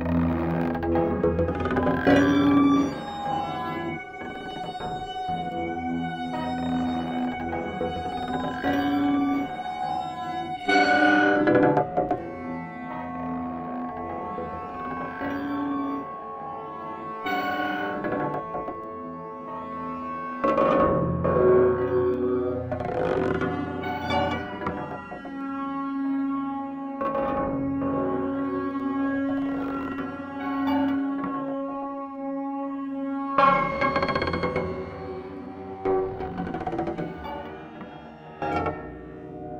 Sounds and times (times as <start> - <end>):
Music: 0.0 - 39.5.